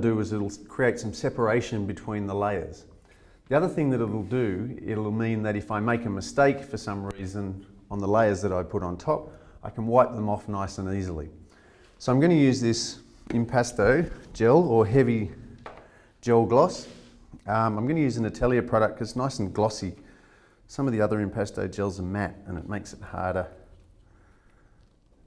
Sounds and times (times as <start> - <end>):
Speech: 0.0 - 2.9, 3.5 - 11.4, 12.0 - 15.5, 16.2 - 20.0, 20.7 - 23.7.